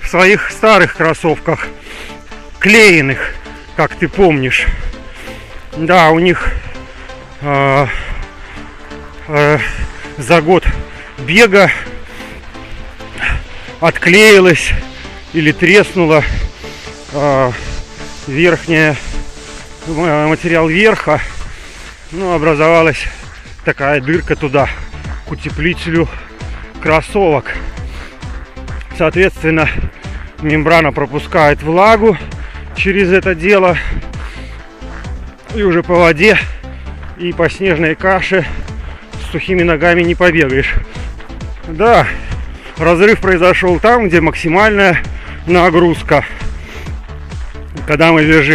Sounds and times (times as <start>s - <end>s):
Speech: 0.0s - 1.7s, 2.6s - 4.7s, 5.8s - 6.6s, 7.4s - 8.0s, 9.2s - 11.8s, 13.8s - 14.8s, 15.4s - 16.3s, 17.1s - 17.6s, 18.2s - 19.0s, 19.9s - 21.3s, 22.1s - 26.2s, 26.8s - 27.6s, 28.9s - 29.8s, 30.4s - 32.2s, 32.8s - 33.9s, 35.5s - 36.6s, 37.2s - 38.5s, 39.2s - 40.8s, 41.7s - 42.2s, 42.8s - 46.4s, 47.8s - 48.5s
Music: 0.0s - 48.5s
Outside, urban or manmade: 0.0s - 48.5s
Run: 0.3s - 48.5s.